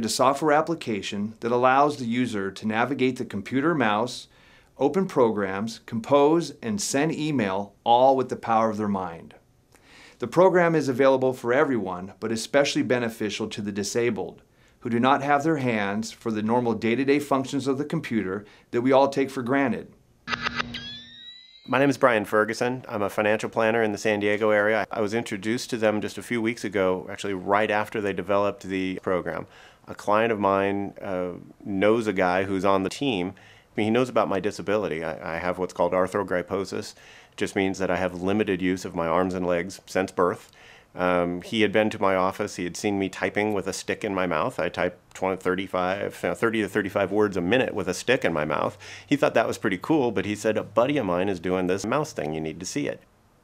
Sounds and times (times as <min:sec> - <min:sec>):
Speech: 0:00.0 - 0:09.4, 0:10.2 - 0:20.0, 0:21.7 - 0:53.1.